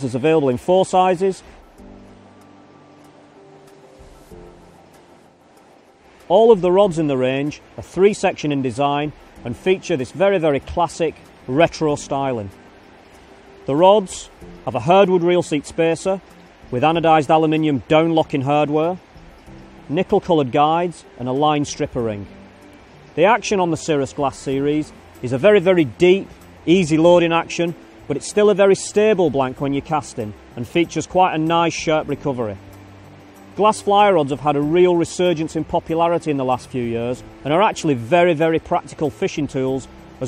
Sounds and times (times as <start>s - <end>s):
Speech: 0.0s - 1.4s, 6.3s - 12.5s, 13.7s - 19.0s, 19.9s - 22.3s, 23.2s - 32.6s, 33.6s - 40.2s.